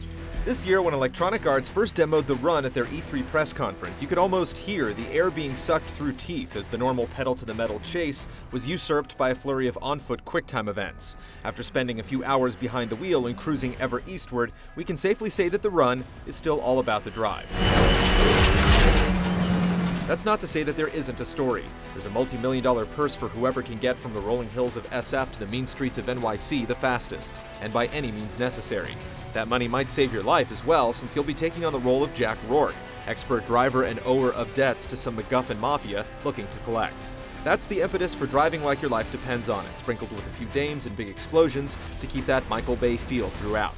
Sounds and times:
Speech: 0.0 - 17.5, 20.1 - 43.7
Music: 0.0 - 43.7.

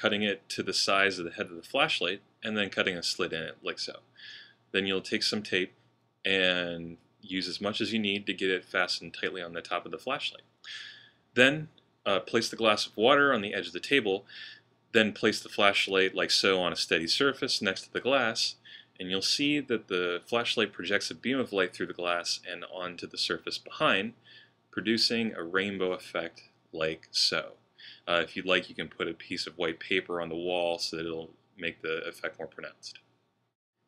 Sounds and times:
Speech: 0.0 - 24.2, 24.8 - 33.1.

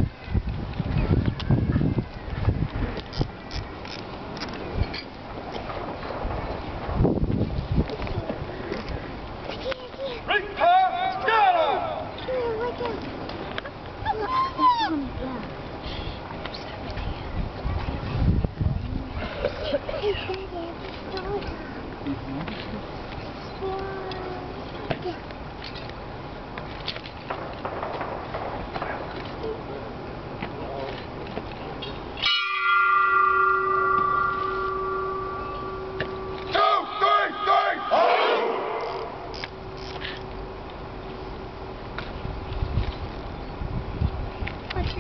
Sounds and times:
Outside, urban or manmade: 0.0 - 45.0.

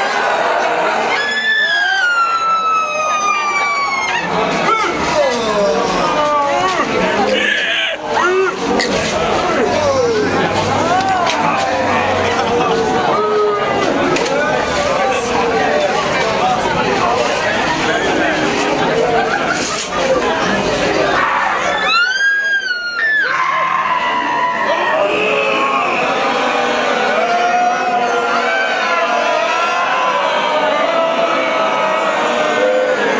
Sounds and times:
Speech: 0.0 - 33.1.

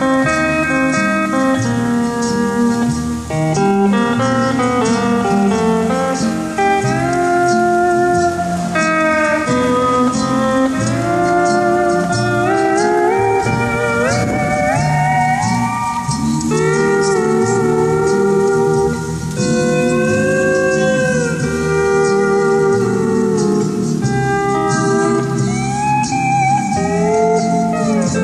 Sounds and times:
Steel guitar, slide guitar: 0.0 - 28.2.

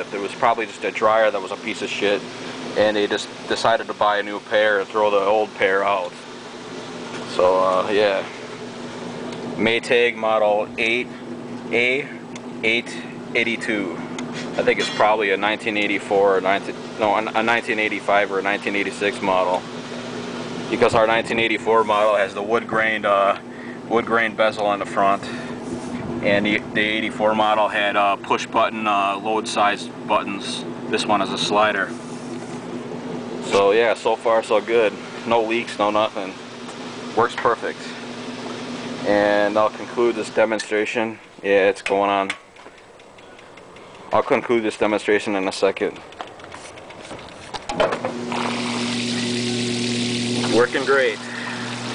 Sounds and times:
Speech: 0.0 - 6.2, 7.3 - 8.4, 9.6 - 11.1, 11.7 - 14.0, 14.6 - 19.6, 20.7 - 25.4, 26.2 - 32.0, 33.4 - 36.4, 37.1 - 38.0, 39.0 - 42.4, 44.1 - 46.0, 50.4 - 51.2.

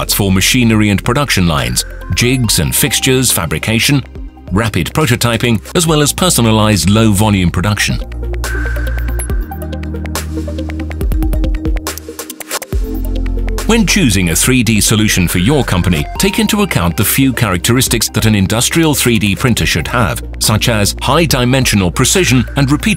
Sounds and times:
Speech: 0.0 - 8.0, 13.6 - 22.9
Music: 0.0 - 22.9.

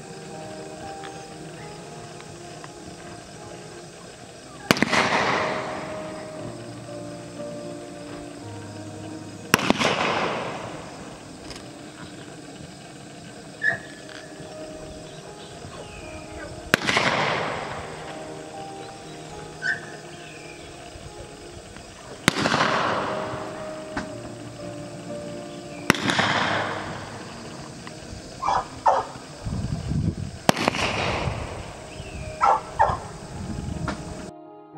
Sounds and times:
Music: 0.0 - 34.7.

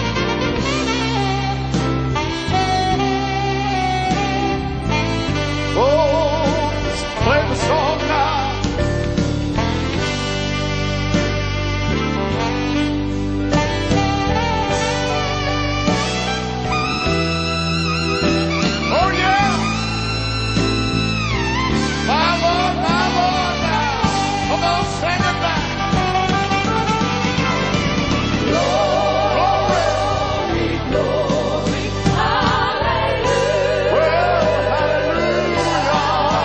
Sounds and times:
Tender music: 0.0 - 36.4.

